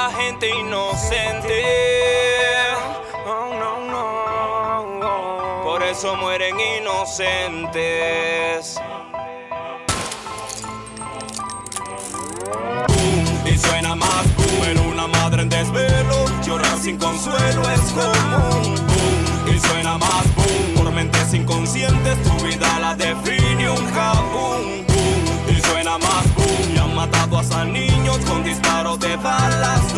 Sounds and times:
Music: 0:00.0 - 0:29.9.

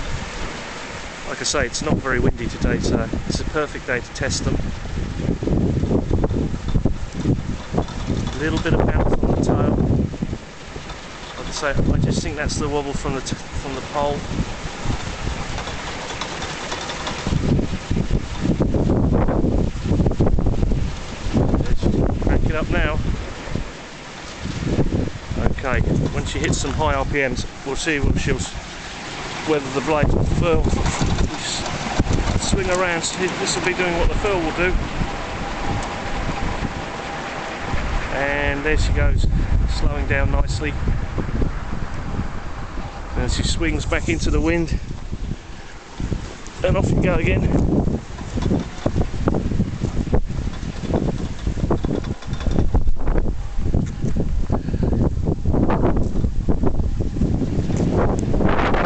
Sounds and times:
Wind noise (microphone): 0:00.0 - 0:00.6, 0:01.4 - 0:23.7, 0:24.3 - 0:28.7, 0:29.4 - 0:58.8.

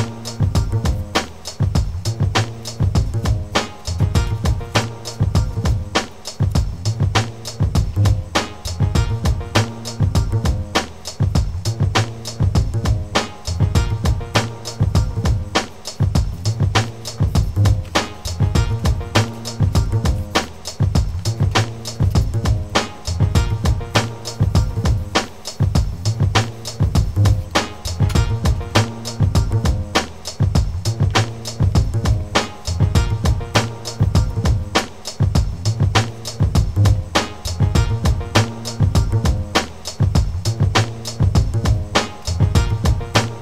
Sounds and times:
Music: 0:00.0 - 0:43.4.

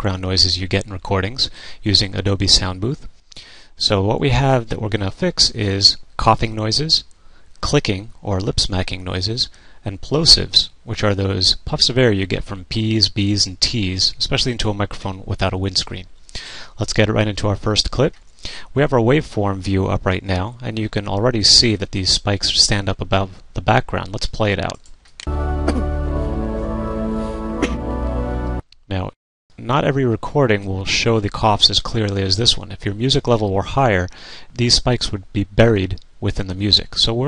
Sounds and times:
Speech: 0:00.0 - 0:03.1, 0:03.8 - 0:16.1, 0:16.8 - 0:24.8, 0:28.9 - 0:37.2
Music: 0:25.3 - 0:28.7.

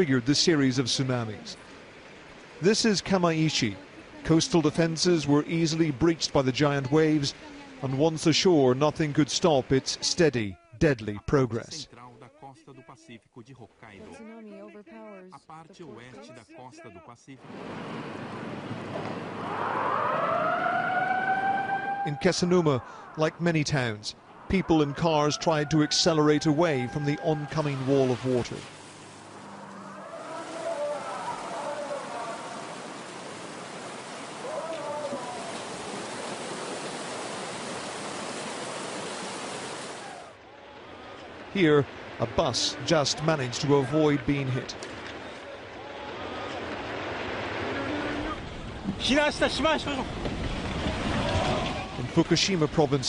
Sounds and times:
Speech: 0:00.0 - 0:01.6, 0:02.6 - 0:17.4, 0:22.1 - 0:28.6, 0:41.6 - 0:44.8, 0:49.0 - 0:50.1, 0:51.9 - 0:53.0
Outside, rural or natural: 0:00.0 - 0:13.0, 0:13.7 - 0:53.0.

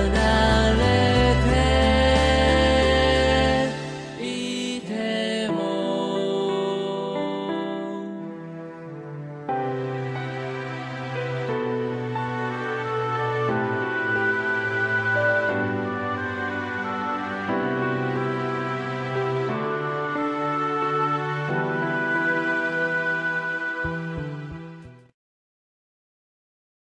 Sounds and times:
Sad music: 0:00.0 - 0:25.2.

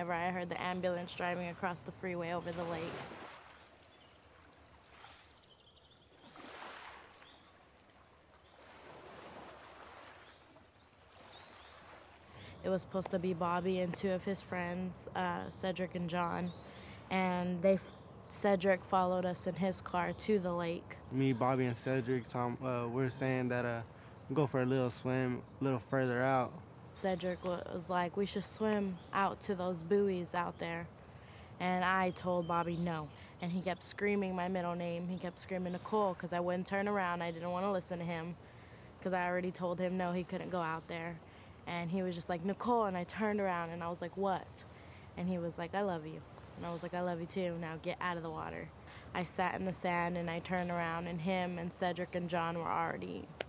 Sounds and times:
Speech: 0:00.0 - 0:02.9, 0:12.6 - 0:16.5, 0:17.1 - 0:30.9, 0:31.6 - 0:38.4, 0:39.0 - 0:44.6, 0:45.2 - 0:53.3.

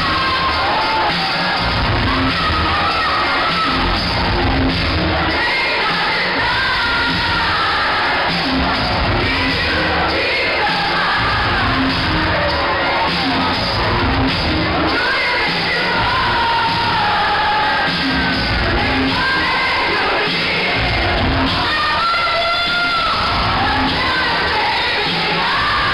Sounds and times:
Cheering: 0:00.0 - 0:25.9
Crowd: 0:00.0 - 0:25.9
Music: 0:00.0 - 0:25.9
Singing: 0:00.0 - 0:25.9.

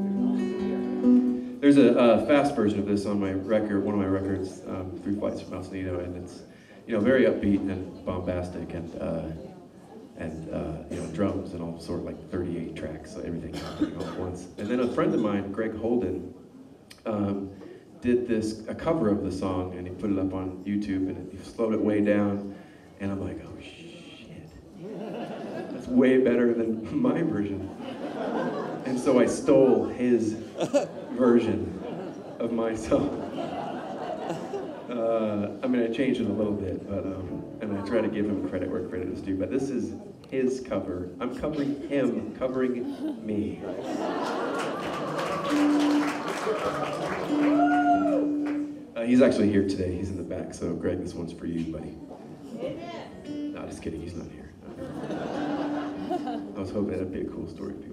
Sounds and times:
Hubbub, speech noise, speech babble: 0:00.0 - 0:57.9.

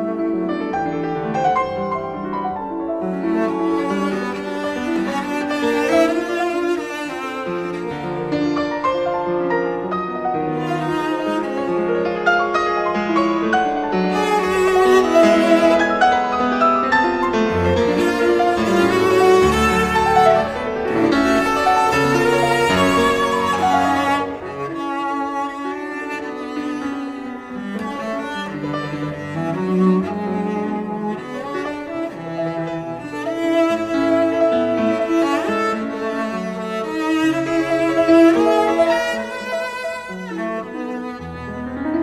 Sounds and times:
Music: 0:00.0 - 0:42.0.

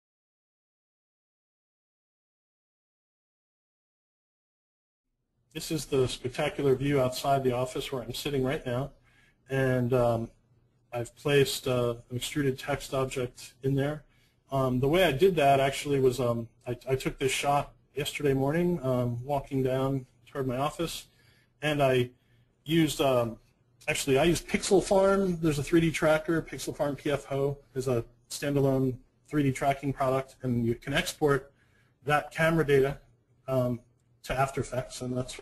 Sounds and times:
Speech: 0:05.6 - 0:35.4.

